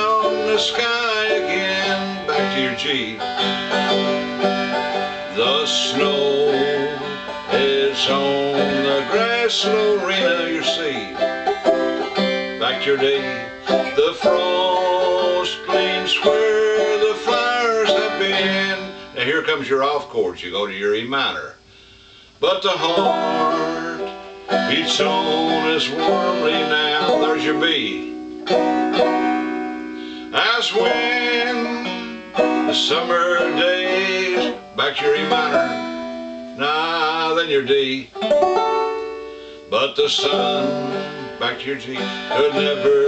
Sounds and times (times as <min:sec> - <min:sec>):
Banjo: 0:00.0 - 0:19.8, 0:22.4 - 0:43.0
Acoustic guitar: 0:00.0 - 0:43.0.